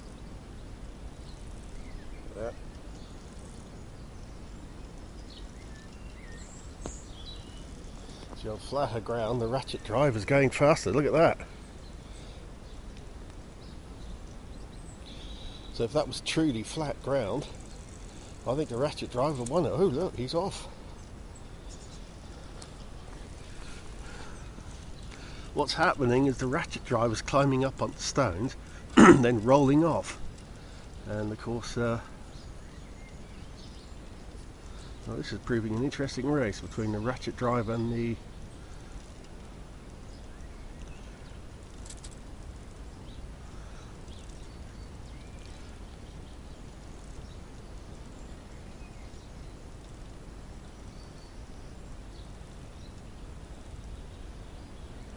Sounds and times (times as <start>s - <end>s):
Speech: 2.3s - 2.6s, 8.4s - 11.5s, 15.8s - 17.6s, 18.4s - 20.8s, 25.6s - 30.2s, 31.0s - 32.1s, 35.0s - 38.2s.